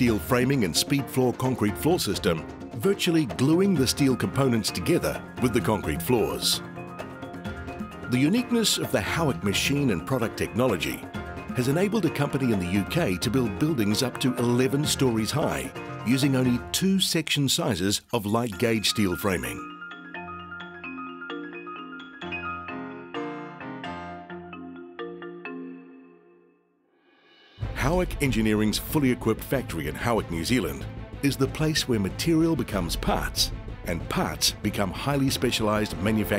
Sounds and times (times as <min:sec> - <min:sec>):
Speech: 0:00.0 - 0:06.6, 0:08.1 - 0:19.6, 0:27.8 - 0:36.3
Marimba, xylophone: 0:18.5 - 0:26.4.